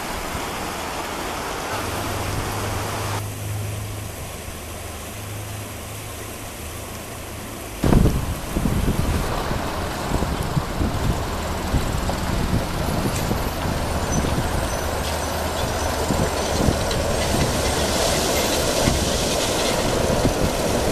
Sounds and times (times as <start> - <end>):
Truck: 0.0 - 20.9.